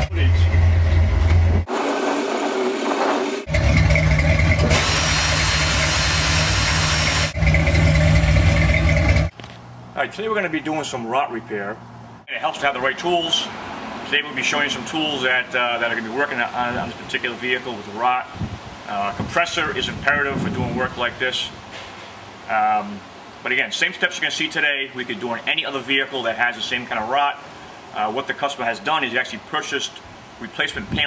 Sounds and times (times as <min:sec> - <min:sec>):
Speech: 0:00.0 - 0:00.6, 0:10.0 - 0:21.6, 0:22.5 - 0:27.4, 0:28.0 - 0:31.0.